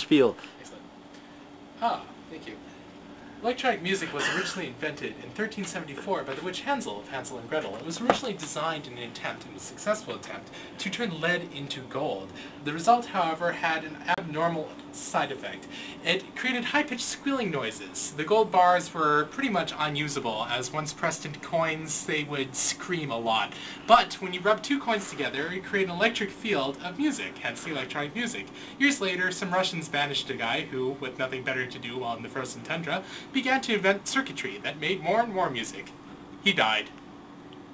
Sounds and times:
Speech: 0.0 - 0.9, 1.8 - 2.6, 3.4 - 37.0.

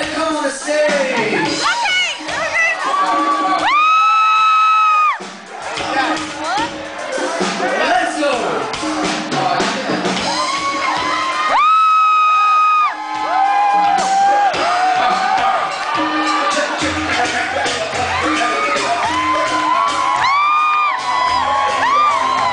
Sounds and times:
Music: 0.0 - 22.5.

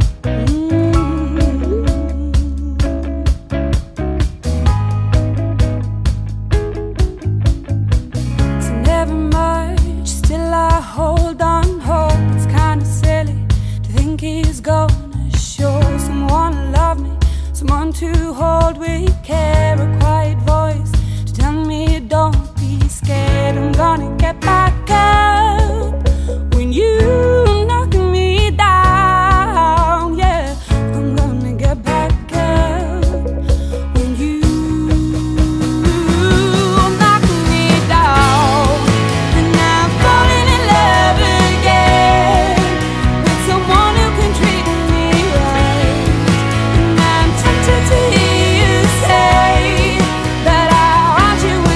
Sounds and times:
Pop music: 0.0 - 51.7.

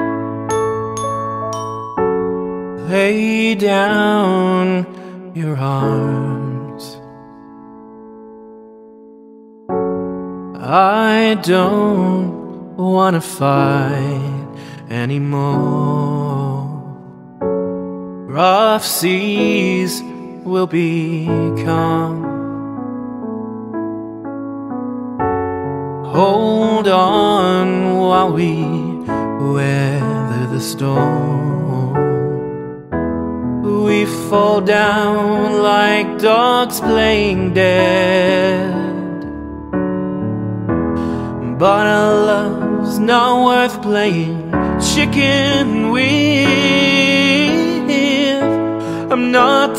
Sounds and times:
Music: 0.0 - 49.7.

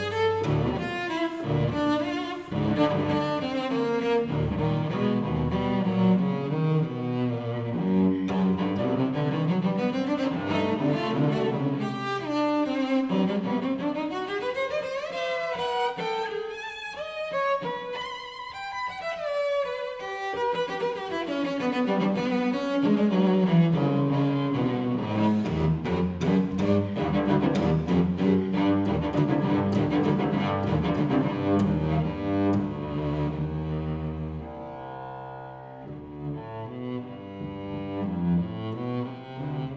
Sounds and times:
Double bass: 0.0 - 13.8, 21.5 - 39.7
Cello: 0.0 - 39.7.

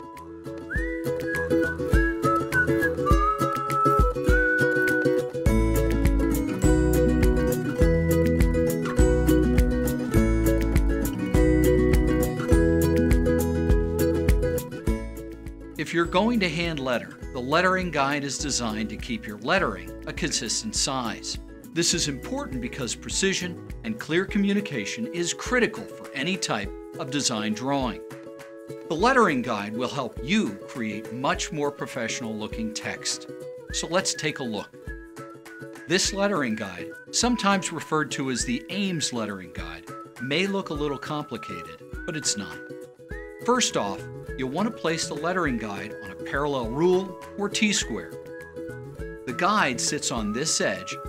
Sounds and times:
Music: 0.0 - 51.0
Speech: 15.8 - 28.0, 28.9 - 33.2, 33.8 - 34.7, 35.9 - 42.6, 43.5 - 48.2, 49.3 - 51.0.

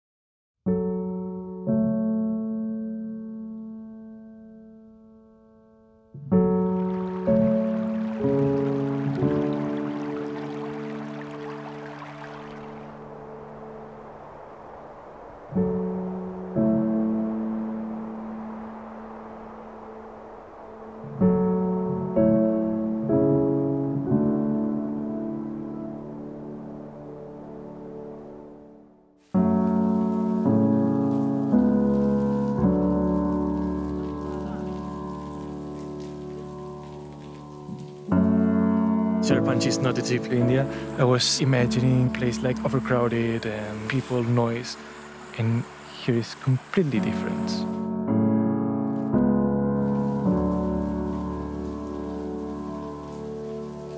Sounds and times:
Piano: 0.6 - 53.9.

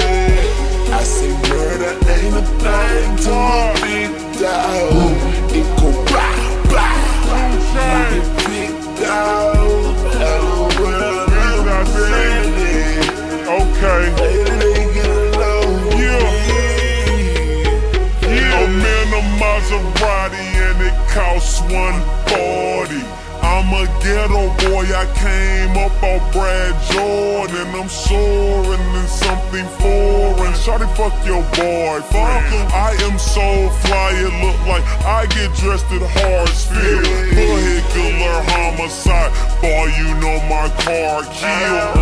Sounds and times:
Music: 0.0 - 42.0.

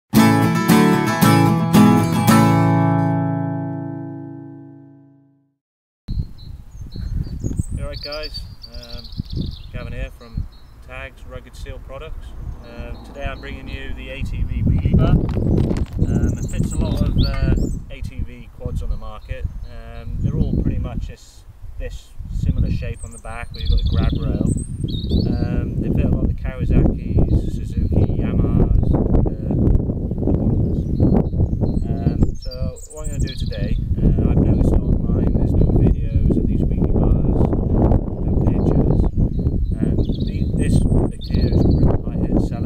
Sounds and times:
Music: 0.1 - 5.5
Speech: 7.8 - 9.1, 9.7 - 15.2, 16.0 - 24.5, 25.3 - 29.6, 31.8 - 37.5, 38.2 - 39.0, 39.8 - 42.6.

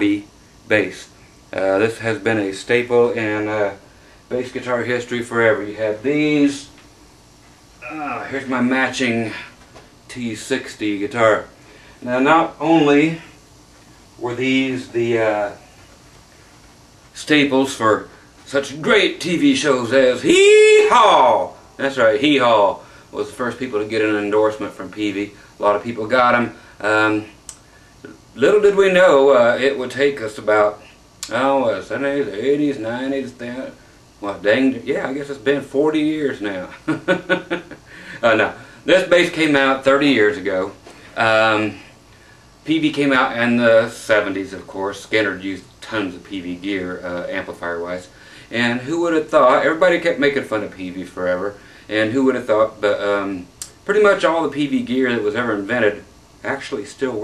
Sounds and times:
Speech: 0.0 - 6.8, 7.8 - 13.4, 14.2 - 15.7, 17.1 - 27.4, 28.0 - 36.9, 38.2 - 41.9, 42.6 - 57.2.

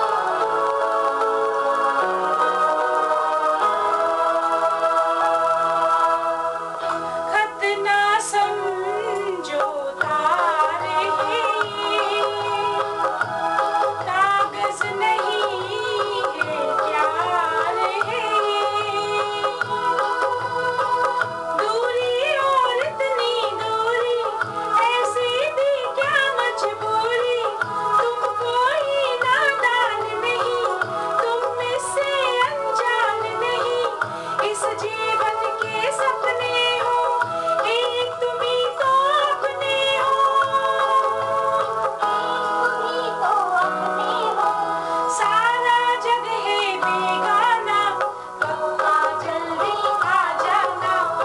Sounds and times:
Singing: 0.0 - 51.2.

